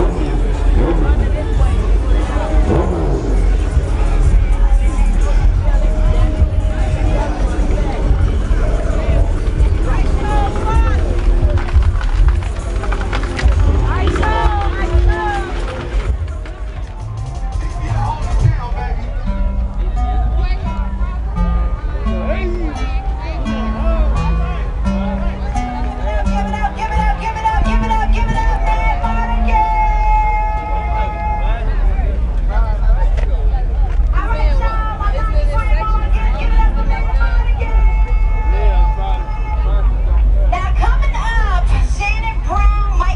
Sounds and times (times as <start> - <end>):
Music: 0.0 - 43.1.